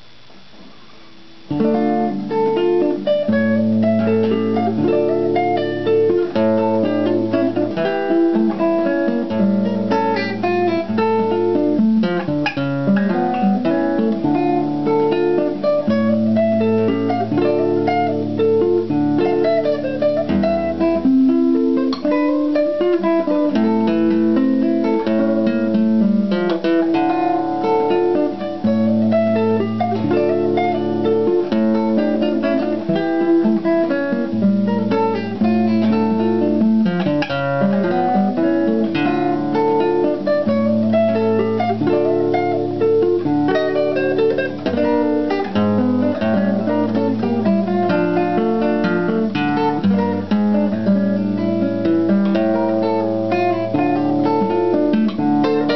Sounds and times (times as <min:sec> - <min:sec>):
Acoustic guitar: 0:00.0 - 0:55.7
Strum: 0:00.0 - 0:55.7.